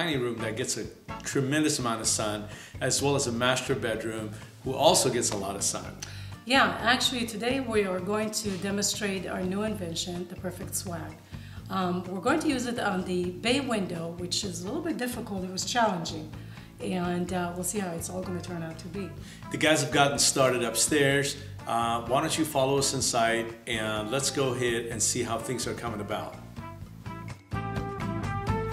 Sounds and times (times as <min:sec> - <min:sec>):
Female speech, woman speaking: 0:06.5 - 0:11.1, 0:11.7 - 0:19.2.